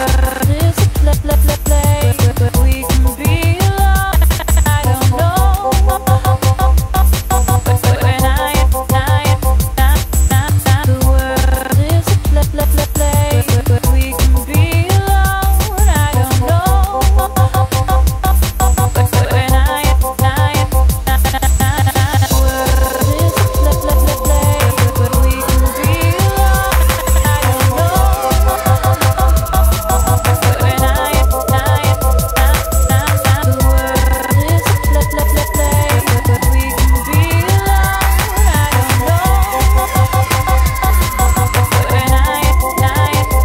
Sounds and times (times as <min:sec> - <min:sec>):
Drum and bass: 0:00.0 - 0:43.4.